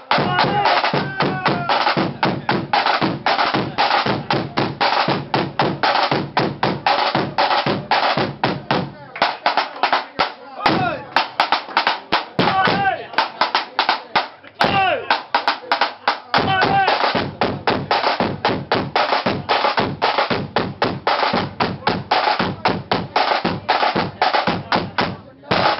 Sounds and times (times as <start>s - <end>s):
Speech: 0.0s - 5.6s, 7.0s - 20.1s, 21.3s - 25.7s
Drum: 0.0s - 25.7s.